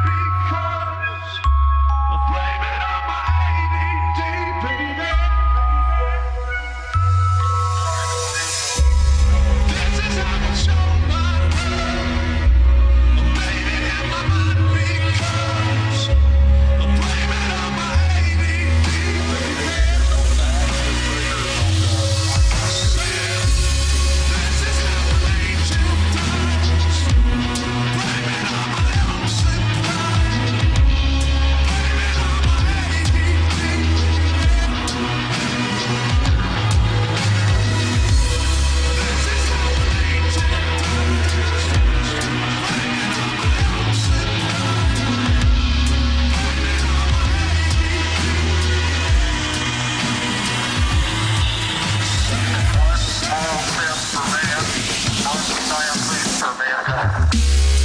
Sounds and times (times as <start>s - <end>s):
Dubstep: 0.0s - 57.8s.